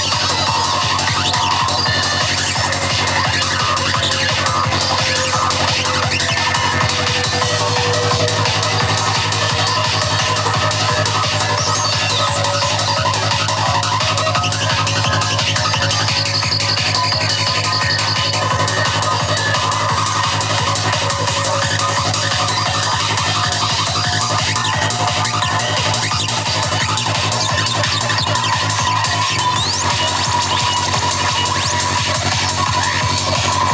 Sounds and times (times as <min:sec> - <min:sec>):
Exciting music: 0:00.0 - 0:33.7.